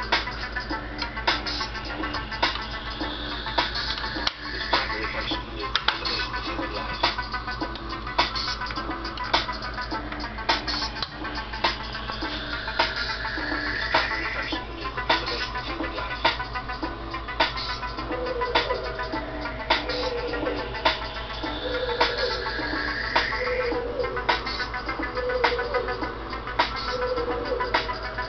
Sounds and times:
Music: 0.0s - 28.2s
Speech: 4.7s - 7.0s.

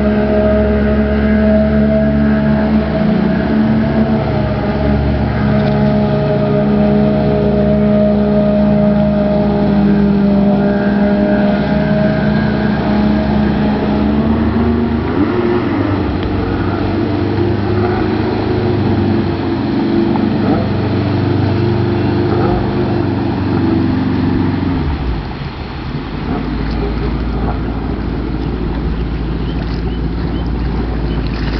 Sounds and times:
Motorboat, speedboat: 0.0s - 31.5s.

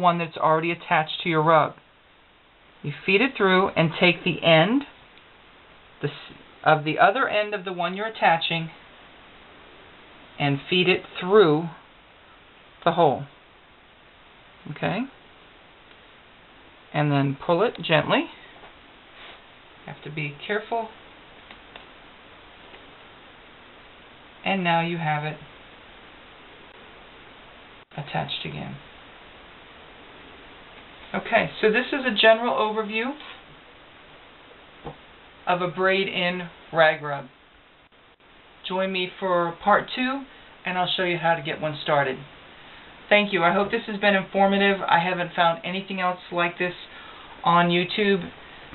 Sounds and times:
Speech: 0.0s - 1.8s, 2.8s - 5.0s, 6.0s - 8.8s, 10.4s - 11.8s, 12.8s - 13.3s, 14.7s - 15.2s, 16.9s - 18.4s, 19.9s - 21.0s, 24.4s - 25.5s, 28.0s - 28.8s, 31.1s - 33.4s, 35.5s - 37.4s, 38.6s - 42.3s, 43.1s - 48.3s
Inside, small room: 0.0s - 48.7s.

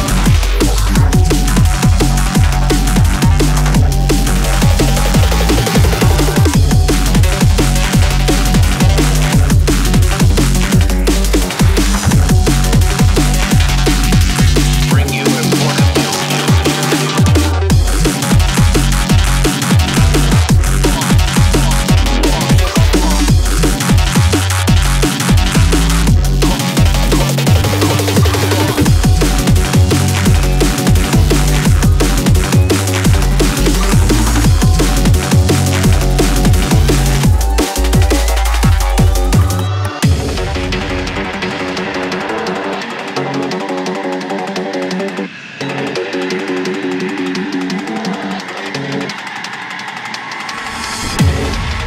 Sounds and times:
Drum and bass: 0.0s - 51.8s
Dubstep: 0.0s - 51.8s.

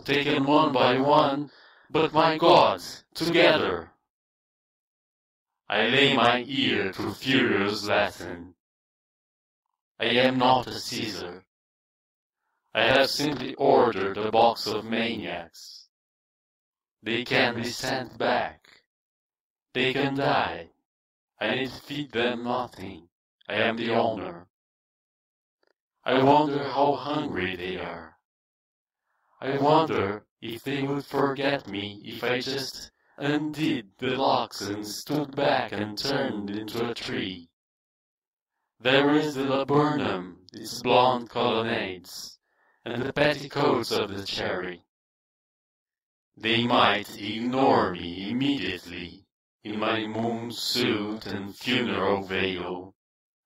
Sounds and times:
Speech: 0.0s - 4.0s, 5.7s - 8.6s, 10.0s - 11.5s, 12.8s - 15.9s, 17.0s - 18.8s, 19.8s - 20.8s, 21.4s - 24.5s, 26.0s - 28.2s, 29.4s - 37.5s, 38.8s - 44.9s, 46.4s - 53.0s.

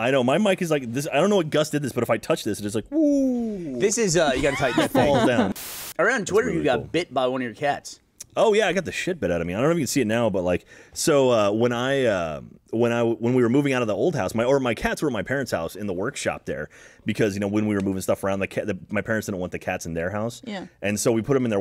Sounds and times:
Speech: 0.0s - 21.6s.

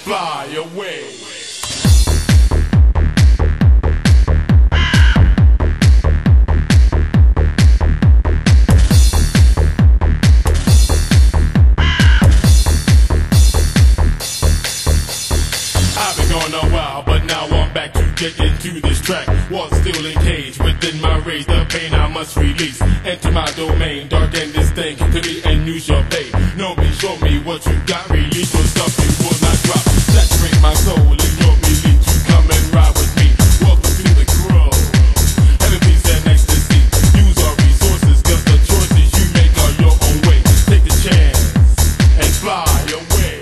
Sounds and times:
Music: 0.0s - 43.4s.

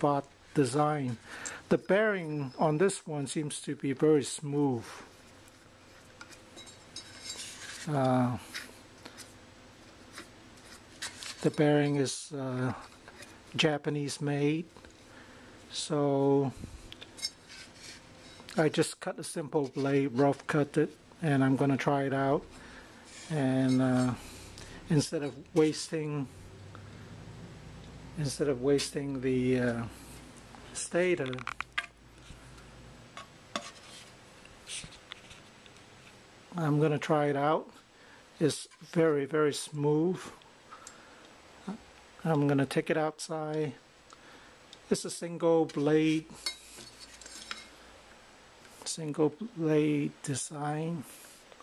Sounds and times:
Speech: 0.0s - 5.0s, 7.8s - 8.5s, 11.4s - 12.9s, 13.6s - 14.7s, 15.7s - 16.6s, 18.5s - 22.5s, 23.3s - 24.2s, 24.9s - 26.3s, 28.2s - 30.0s, 30.8s - 31.5s, 36.5s - 37.8s, 38.4s - 40.4s, 41.7s - 43.8s, 44.9s - 46.4s, 48.8s - 51.1s.

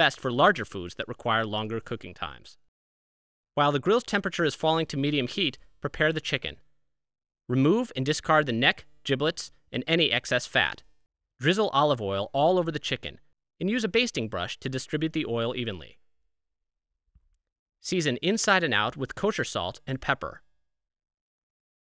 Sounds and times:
Speech: 0.0s - 2.6s, 3.6s - 6.7s, 7.5s - 16.0s, 17.8s - 20.5s.

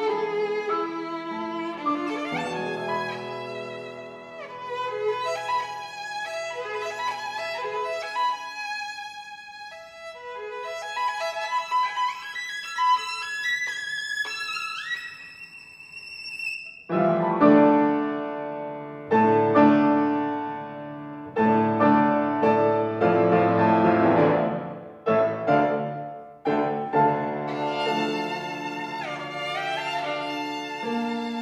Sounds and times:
Violin, fiddle: 0.0s - 18.0s, 25.2s - 31.4s.

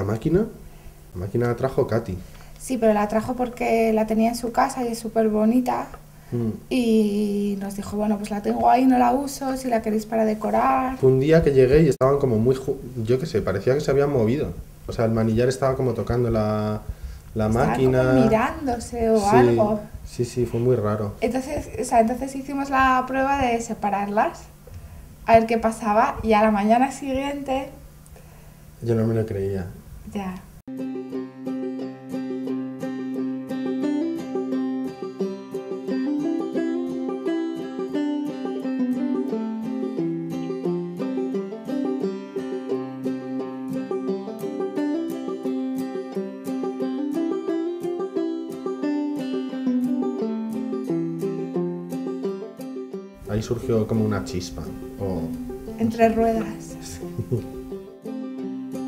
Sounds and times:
Speech: 1.2s - 24.4s, 28.8s - 30.4s, 53.3s - 57.4s.

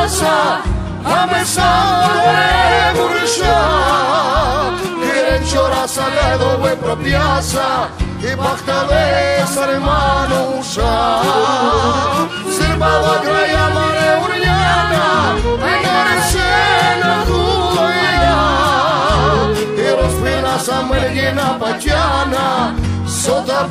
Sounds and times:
Music: 0.0s - 23.7s.

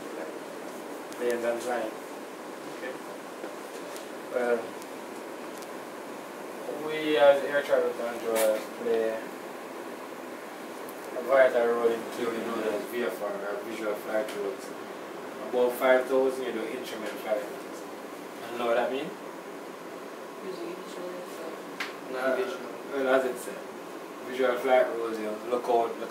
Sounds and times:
Speech: 1.2s - 2.0s, 6.6s - 9.3s, 11.2s - 14.8s, 15.4s - 17.8s, 18.4s - 19.2s, 20.4s - 23.7s, 24.3s - 26.1s.

